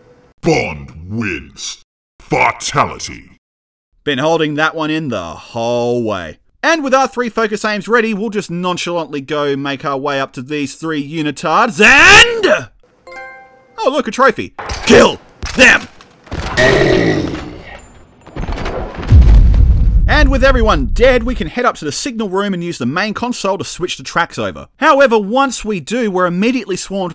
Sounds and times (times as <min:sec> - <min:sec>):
Speech: 0:00.4 - 0:03.4, 0:04.1 - 0:12.8, 0:13.8 - 0:15.9, 0:20.1 - 0:27.1
Music: 0:13.1 - 0:13.8.